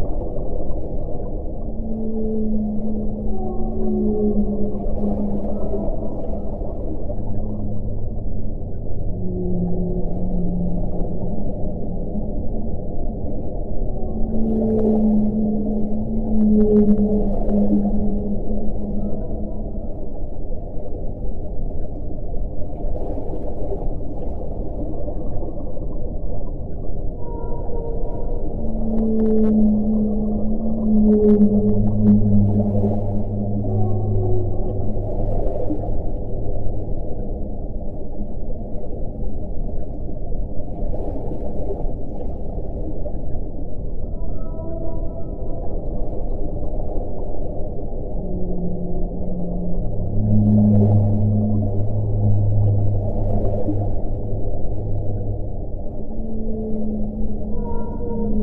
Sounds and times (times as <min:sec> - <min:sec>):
Whale vocalization: 0:00.0 - 0:58.4.